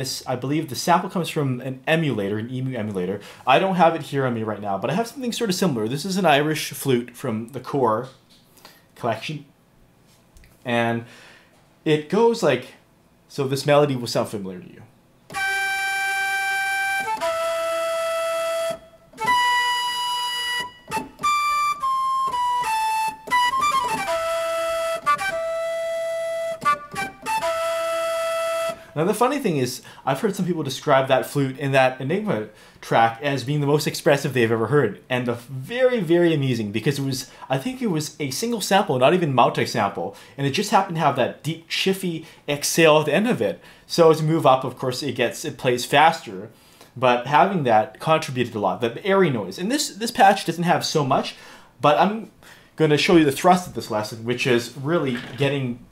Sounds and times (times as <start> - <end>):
Flute: 15.3 - 29.0.